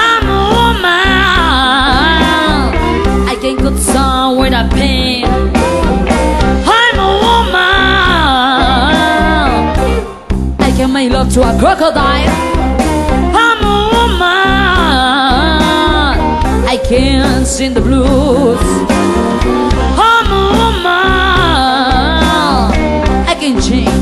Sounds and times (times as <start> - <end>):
Blues: 0.0 - 24.0
Guitar: 0.0 - 24.0.